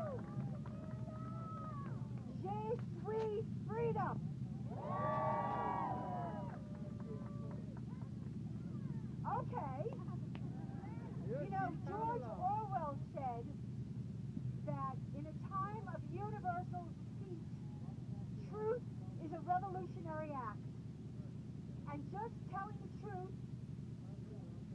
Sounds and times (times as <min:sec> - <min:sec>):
Female speech, woman speaking: 0:02.3 - 0:04.2, 0:09.2 - 0:10.2, 0:10.8 - 0:13.5, 0:14.7 - 0:17.5, 0:18.4 - 0:20.6, 0:21.9 - 0:23.3
Narration, monologue: 0:11.1 - 0:24.7.